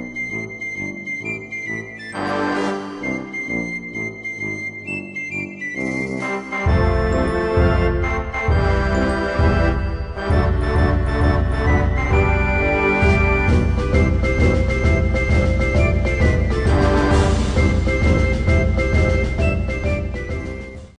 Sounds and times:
Music: 0.0 - 20.9.

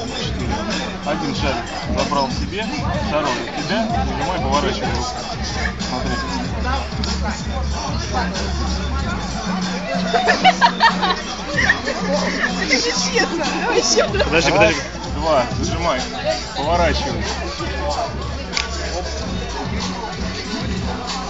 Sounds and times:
Speech: 0.0 - 10.4, 11.2 - 20.6
Music: 0.0 - 21.2.

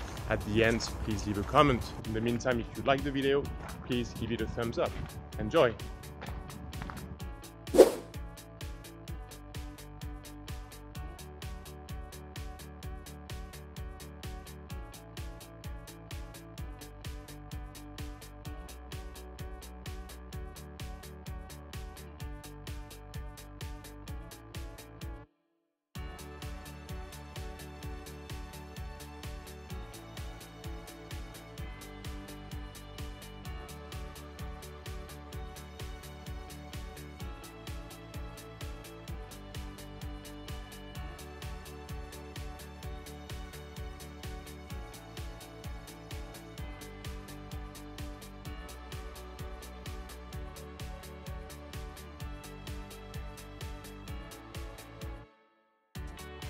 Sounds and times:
Music: 0.0 - 56.5.

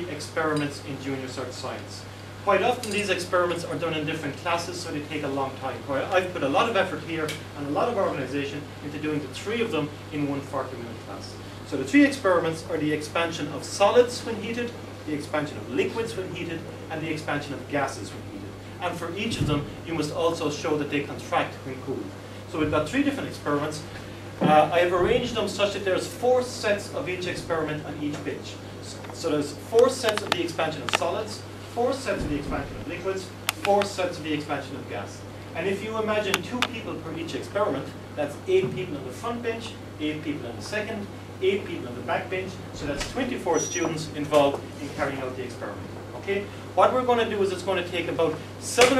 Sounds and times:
Speech: 0.0 - 48.9.

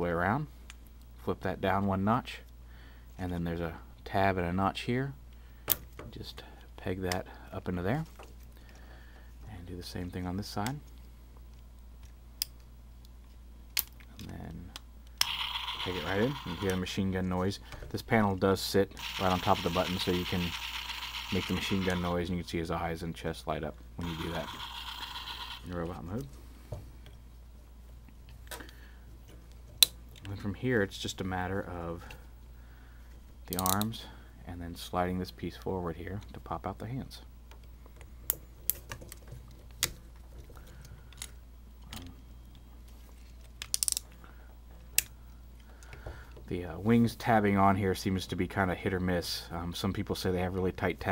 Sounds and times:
Speech: 0.0 - 0.5, 1.2 - 2.5, 3.2 - 5.2, 6.1 - 8.2, 9.4 - 10.8, 14.1 - 14.8, 15.8 - 20.6, 21.3 - 24.6, 25.6 - 26.3, 30.2 - 32.2, 33.5 - 37.3, 46.5 - 51.1
Inside, small room: 0.0 - 51.1.

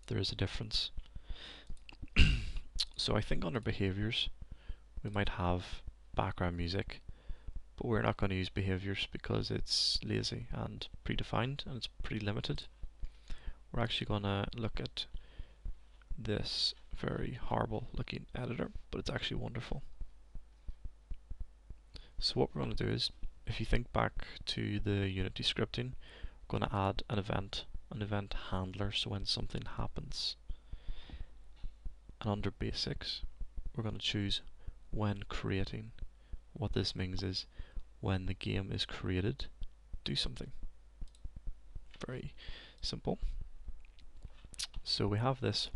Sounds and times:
Speech: 0.0 - 1.0, 2.2 - 4.4, 5.0 - 7.0, 7.8 - 12.7, 13.7 - 15.2, 16.2 - 19.9, 22.0 - 30.4, 32.2 - 36.0, 36.6 - 40.6, 42.0 - 43.3, 44.6 - 45.7.

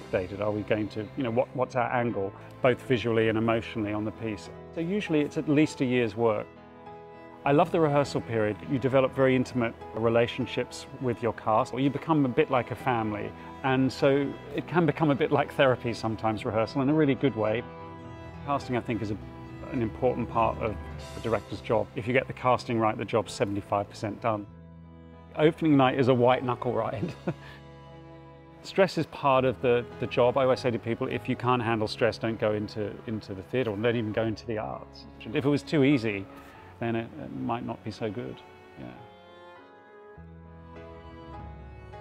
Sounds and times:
Speech: 0.0 - 6.5, 7.4 - 17.6, 18.5 - 24.5, 25.4 - 27.3, 28.6 - 39.1
Music: 0.0 - 42.0.

